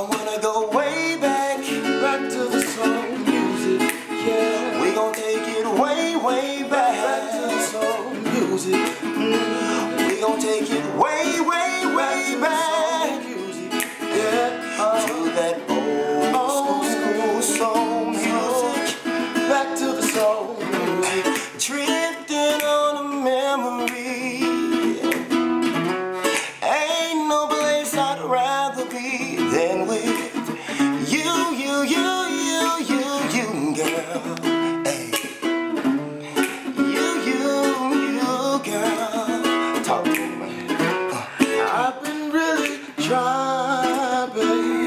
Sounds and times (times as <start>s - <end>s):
Music: 0.0s - 44.8s.